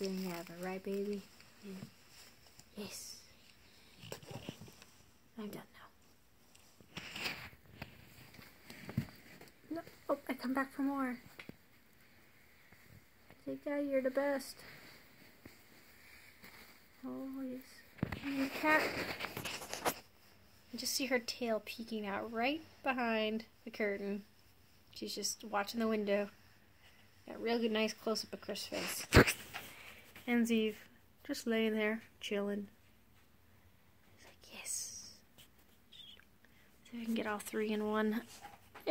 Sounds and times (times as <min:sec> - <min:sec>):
Speech: 0:00.0 - 0:01.9, 0:02.7 - 0:03.3, 0:05.4 - 0:05.9, 0:09.7 - 0:11.3, 0:13.4 - 0:14.6, 0:17.0 - 0:19.0, 0:20.7 - 0:24.3, 0:25.0 - 0:26.4, 0:27.3 - 0:29.1, 0:30.3 - 0:32.8, 0:36.9 - 0:38.9.